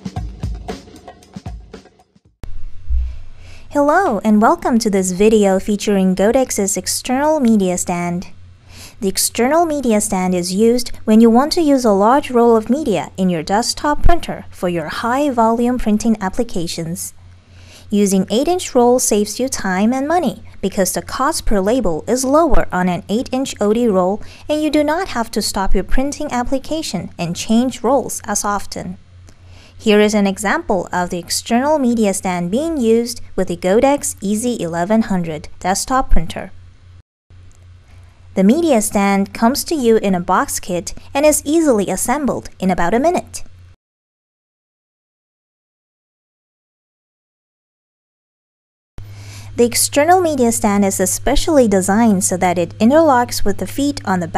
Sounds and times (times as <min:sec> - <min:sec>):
Speech: 0:03.7 - 0:08.4, 0:09.0 - 0:17.2, 0:17.9 - 0:29.0, 0:29.8 - 0:36.6, 0:38.4 - 0:43.5, 0:49.6 - 0:54.3.